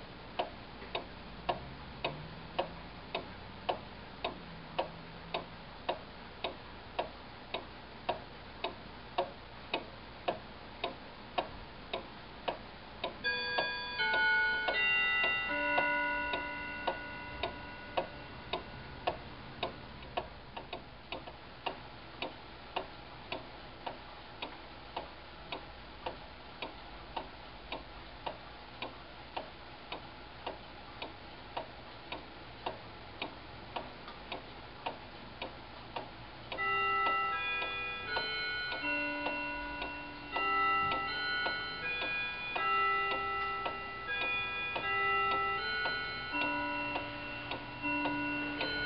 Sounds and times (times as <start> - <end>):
Tick-tock: 0.0 - 48.8.